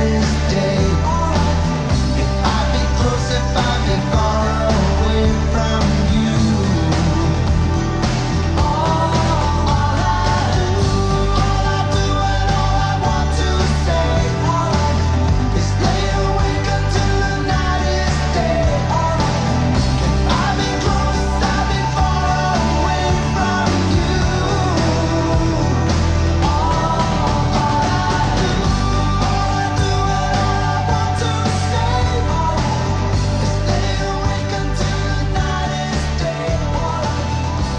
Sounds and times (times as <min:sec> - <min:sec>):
Music: 0:00.0 - 0:37.7.